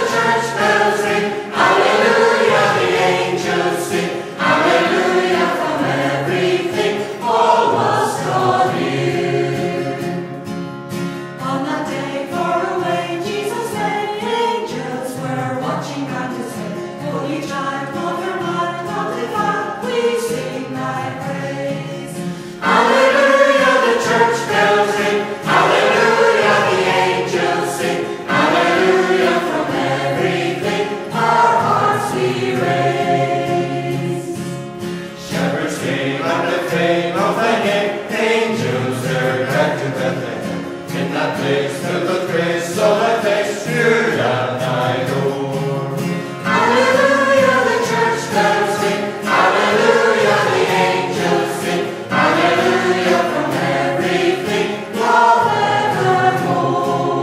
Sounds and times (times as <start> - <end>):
Choir: 0.0 - 10.4, 11.4 - 57.2.